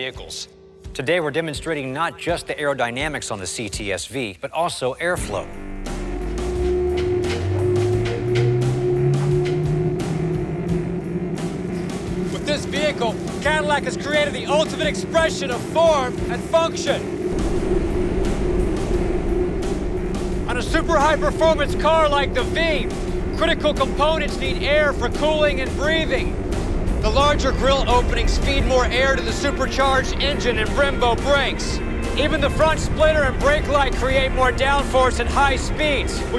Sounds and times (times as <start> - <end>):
Music: 0.0 - 4.0, 5.1 - 36.3
Speech: 0.0 - 5.5, 12.4 - 17.1, 20.5 - 26.3, 27.0 - 36.3.